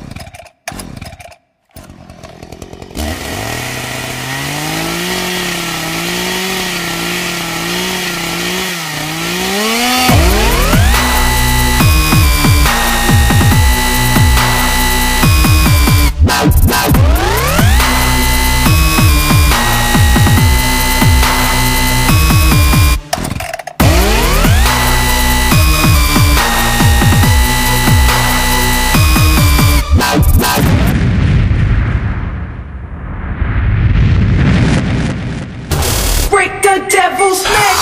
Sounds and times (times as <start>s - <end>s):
Sampler: 3.0s - 23.1s, 23.8s - 30.9s.